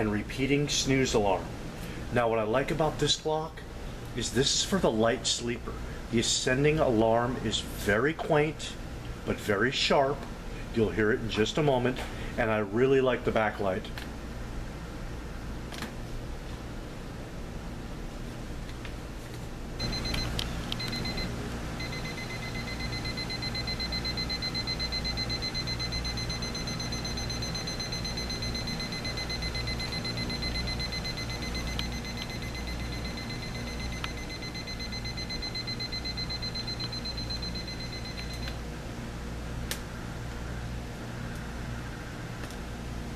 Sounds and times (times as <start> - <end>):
Speech: 0.0 - 1.5, 2.1 - 14.0
Buzzer: 19.8 - 38.5.